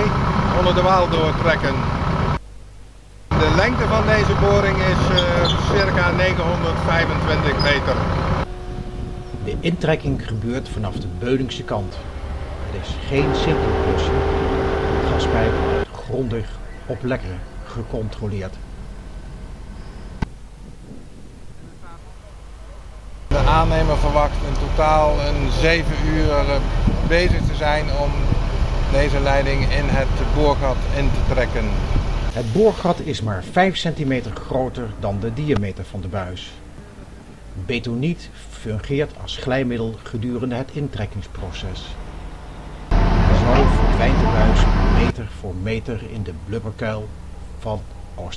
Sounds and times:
Speech: 0:00.0 - 0:01.9, 0:03.3 - 0:08.0, 0:09.4 - 0:12.0, 0:12.7 - 0:18.6, 0:21.6 - 0:36.6, 0:37.6 - 0:42.0, 0:43.3 - 0:48.3
Vehicle: 0:00.0 - 0:02.5, 0:03.3 - 0:20.8, 0:22.0 - 0:48.3.

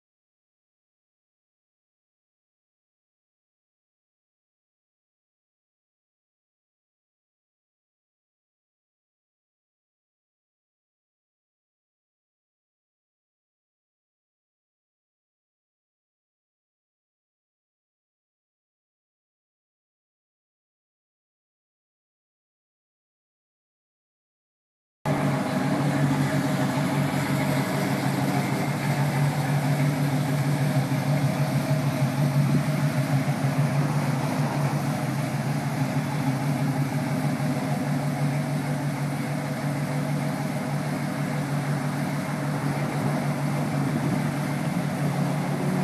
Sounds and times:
Idling: 0:25.1 - 0:45.8
Medium engine (mid frequency): 0:25.1 - 0:45.8
Vehicle: 0:25.1 - 0:45.8.

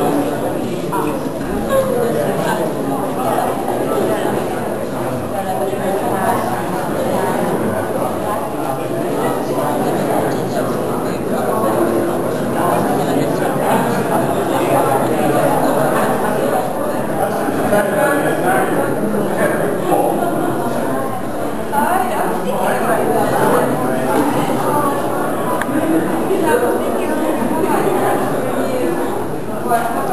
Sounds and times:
Inside, large room or hall: 0:00.0 - 0:30.1
Speech: 0:00.0 - 0:30.1.

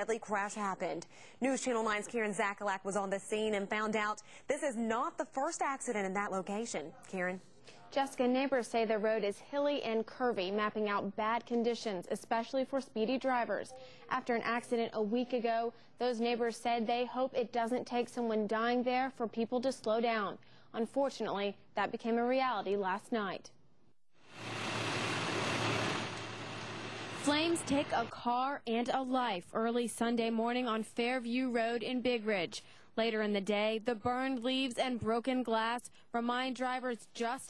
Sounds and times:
Speech: 0:00.0 - 0:23.6, 0:27.3 - 0:37.5.

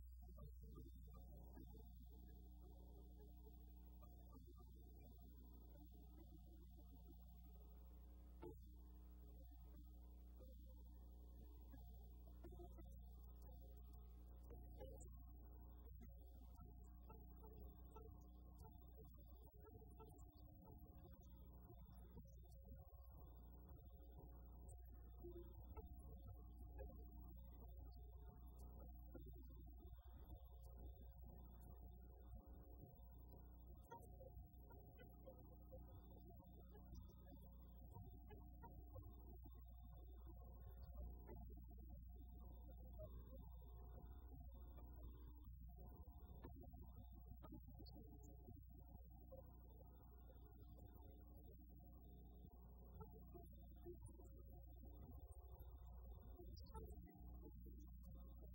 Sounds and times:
Music: 0:00.0 - 0:58.5.

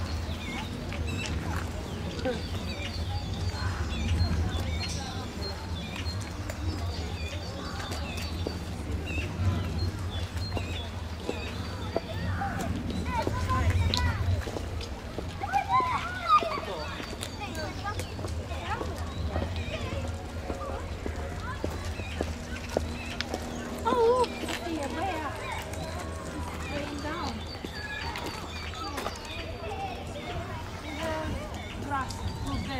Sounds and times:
Speech: 0:00.0 - 0:32.7.

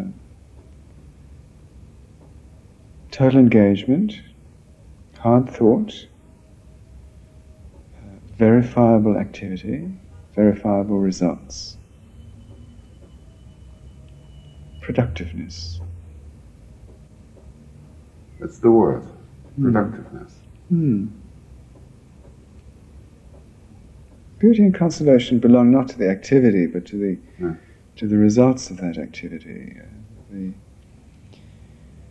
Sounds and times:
Speech: 0:00.0 - 0:00.2, 0:03.1 - 0:04.4, 0:05.2 - 0:06.2, 0:08.0 - 0:11.8, 0:14.8 - 0:15.8, 0:18.4 - 0:21.2, 0:24.4 - 0:30.6.

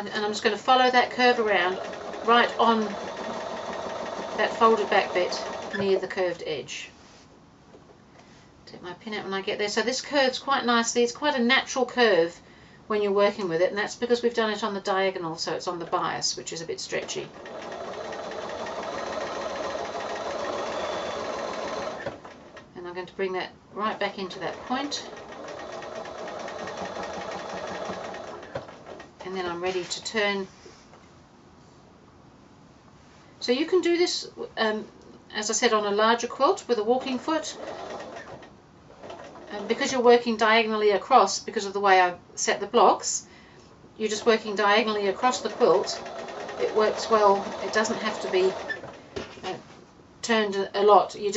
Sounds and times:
Speech: 0:00.0 - 0:03.0, 0:04.4 - 0:07.0, 0:08.7 - 0:17.4, 0:22.8 - 0:25.1, 0:29.2 - 0:30.5, 0:33.4 - 0:37.6, 0:39.5 - 0:43.3, 0:44.0 - 0:46.0, 0:46.6 - 0:48.6, 0:50.2 - 0:51.3
Sewing machine: 0:01.0 - 0:06.0, 0:16.9 - 0:22.7, 0:24.3 - 0:29.1, 0:37.0 - 0:40.0, 0:44.2 - 0:49.0.

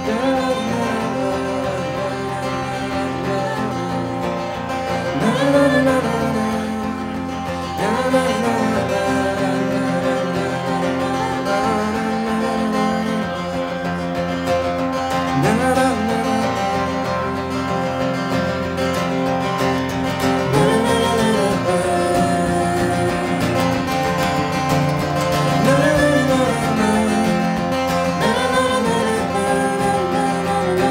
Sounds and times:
Music: 0:00.0 - 0:30.9.

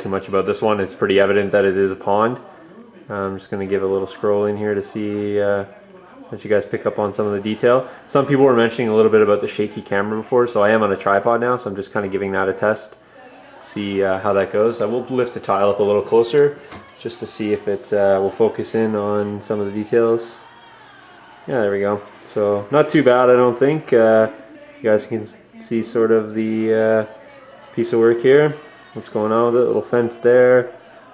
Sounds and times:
Speech: 0:00.0 - 0:31.1.

